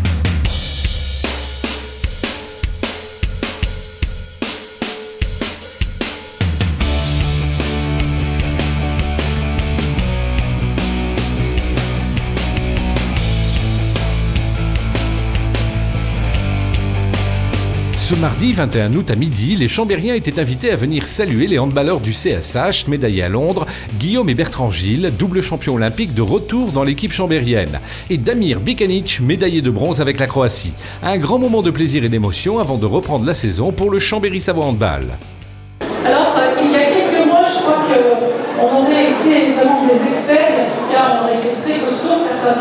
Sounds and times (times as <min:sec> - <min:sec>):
Music: 0:00.0 - 0:42.6
Speech: 0:18.0 - 0:35.2, 0:36.0 - 0:42.6.